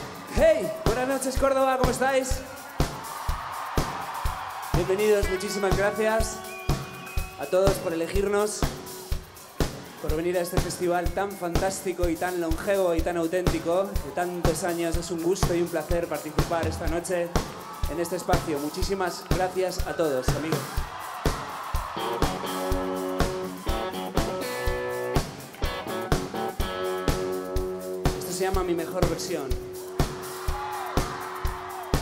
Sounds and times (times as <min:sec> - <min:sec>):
Speech: 0:00.3 - 0:02.5, 0:04.8 - 0:06.4, 0:07.4 - 0:08.7, 0:10.0 - 0:20.7, 0:28.2 - 0:29.6.